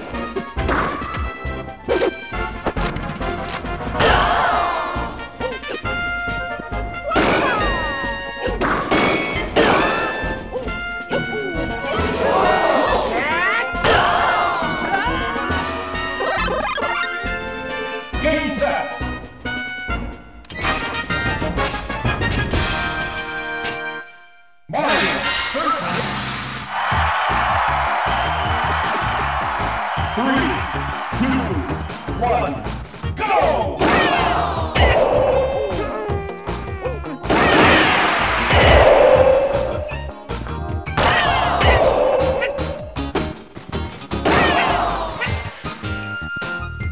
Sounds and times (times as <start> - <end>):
Music: 0.0 - 46.9.